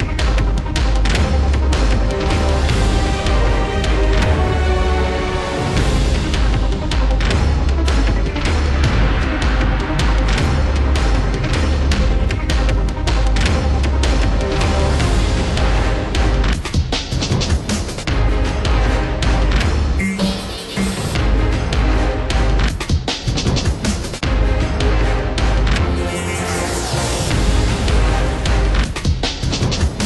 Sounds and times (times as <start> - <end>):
Music: 0.0 - 30.0.